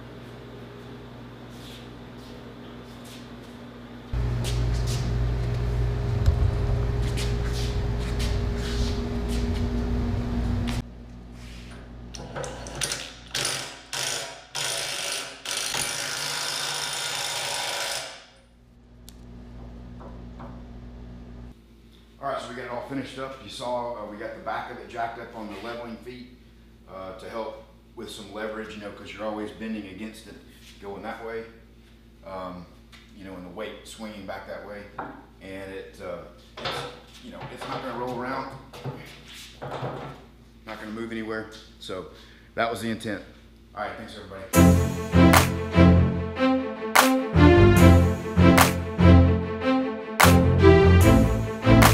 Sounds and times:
Speech: 22.2 - 31.6, 32.2 - 36.4, 37.2 - 38.6, 40.7 - 44.5.

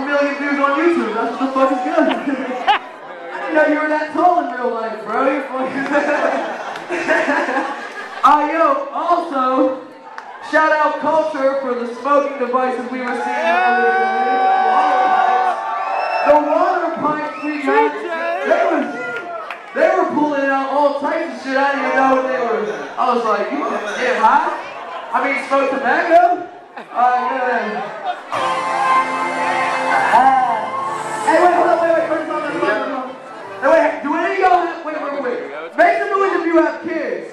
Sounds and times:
Speech: 0.0 - 2.6, 3.3 - 6.5, 8.2 - 15.4, 16.3 - 19.2, 19.8 - 28.2, 31.3 - 37.3.

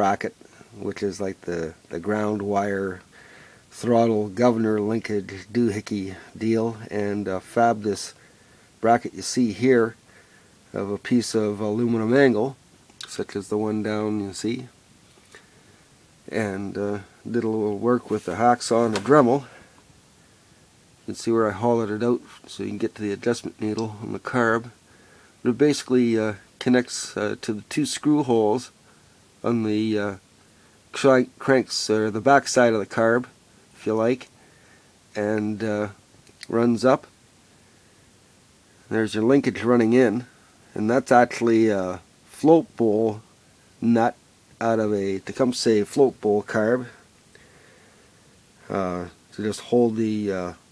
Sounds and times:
Speech: 0.0 - 3.1, 3.7 - 8.2, 8.8 - 10.0, 10.7 - 14.8, 16.3 - 19.6, 21.1 - 24.8, 25.4 - 28.8, 29.4 - 30.2, 30.9 - 34.3, 35.2 - 37.1, 38.9 - 43.2, 43.8 - 47.0, 48.7 - 50.6.

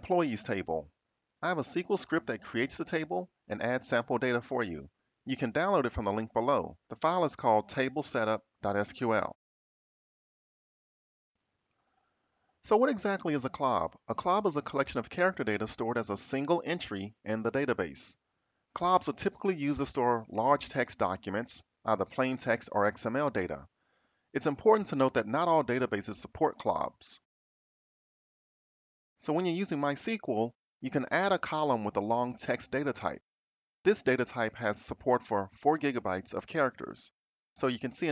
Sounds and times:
Speech: 0.0 - 9.4, 12.7 - 18.2, 18.8 - 23.7, 24.4 - 27.3, 29.2 - 33.3, 33.9 - 38.1.

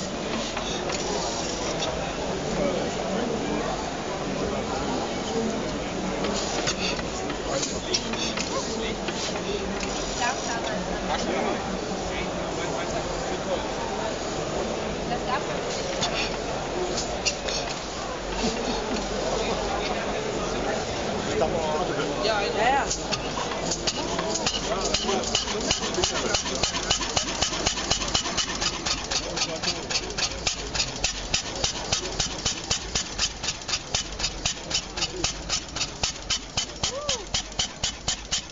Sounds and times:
Speech: 0.0 - 33.1, 33.7 - 36.2.

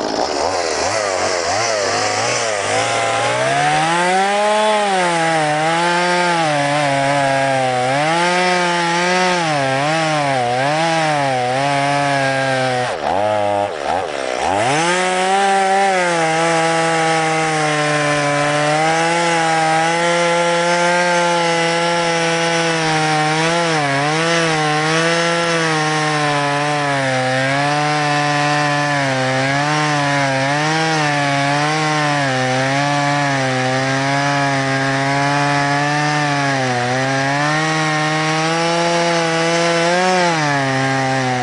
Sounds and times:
Chainsaw: 0.0 - 41.4.

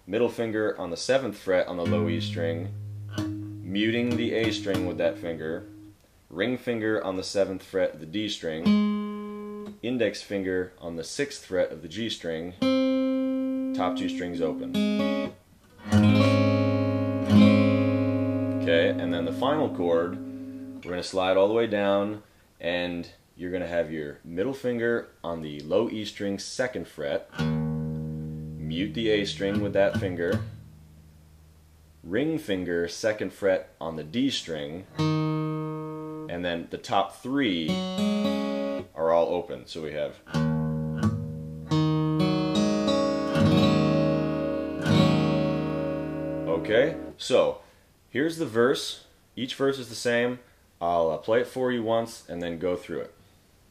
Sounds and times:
Speech: 0.0 - 2.7, 3.7 - 5.7, 6.3 - 8.7, 9.7 - 12.6, 13.8 - 14.8, 18.6 - 20.2, 20.8 - 27.3, 28.6 - 30.5, 32.0 - 34.9, 36.3 - 37.8, 38.8 - 40.3, 46.5 - 53.2
Inside, small room: 0.0 - 53.7
Acoustic guitar: 1.8 - 6.0, 8.6 - 9.8, 12.6 - 20.9, 27.3 - 31.5, 34.9 - 36.4, 37.6 - 38.9, 40.3 - 47.2.

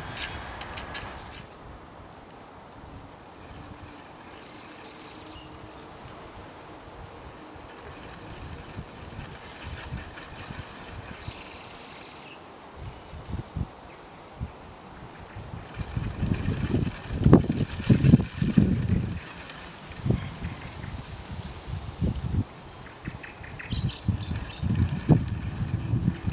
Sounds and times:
Wind noise (microphone): 7.0 - 11.4, 12.8 - 13.8, 14.4 - 26.3.

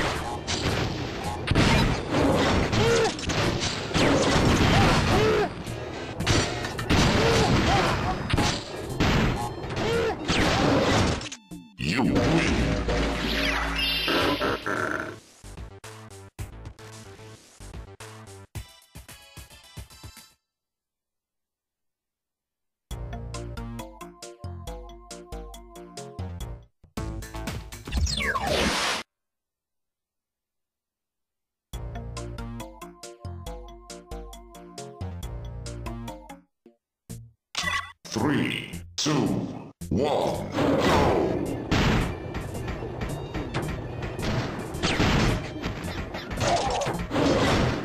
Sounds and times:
Music: 0.0 - 20.5, 22.9 - 28.5, 31.7 - 47.8
Speech: 11.8 - 12.5, 37.6 - 40.6.

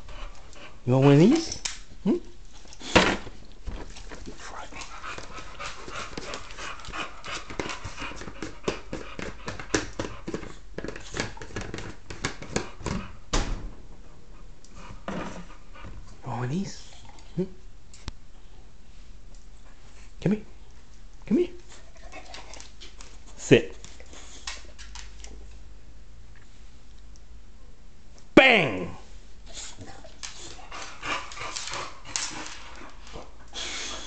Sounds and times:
Speech: 0.8 - 2.3, 16.2 - 17.6, 20.2 - 20.5, 21.3 - 21.6, 23.4 - 23.8, 28.4 - 29.1.

